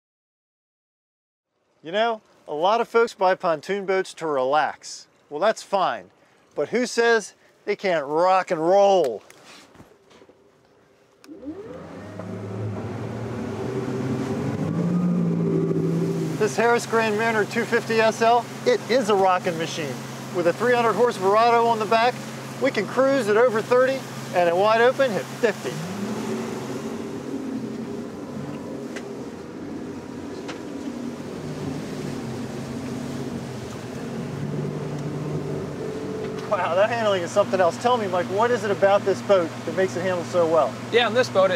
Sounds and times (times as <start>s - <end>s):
Motorboat, speedboat: 10.9s - 41.5s.